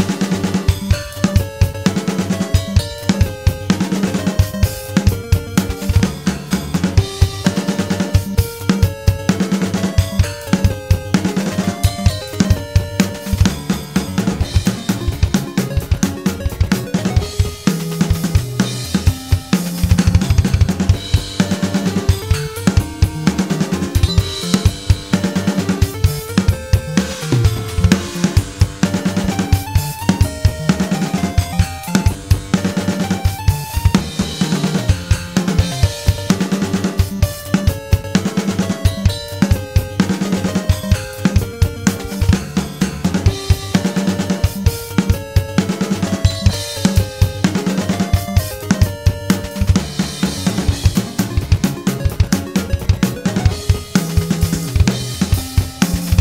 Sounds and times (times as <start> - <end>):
Music: 0.0 - 56.2.